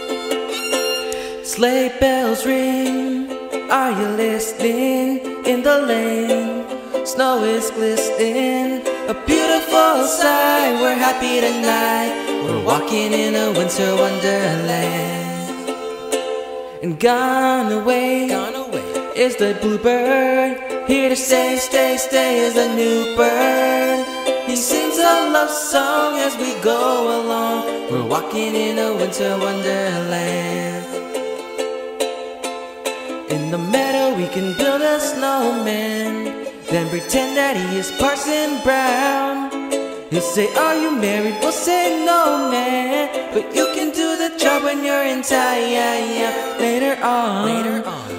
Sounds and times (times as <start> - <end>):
Pizzicato: 0.0 - 48.1.